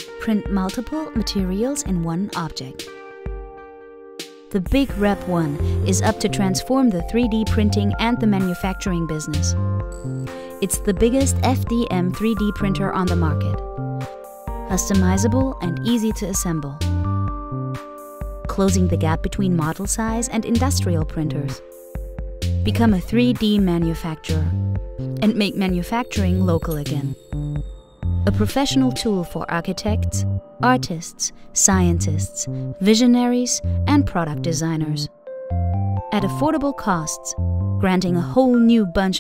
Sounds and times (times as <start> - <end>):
Music: 0.0 - 39.2
Speech: 0.2 - 2.8, 4.5 - 9.6, 10.6 - 13.6, 14.7 - 16.8, 18.5 - 21.6, 22.7 - 24.6, 25.2 - 27.7, 28.3 - 35.1, 36.1 - 39.2.